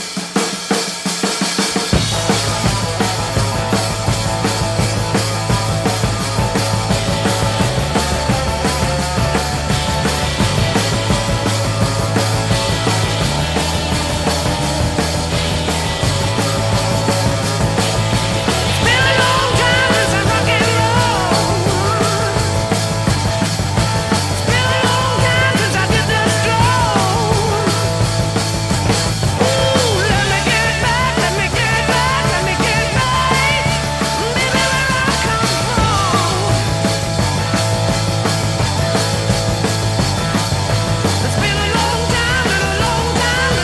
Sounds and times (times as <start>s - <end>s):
Rock and roll: 0.0s - 43.6s.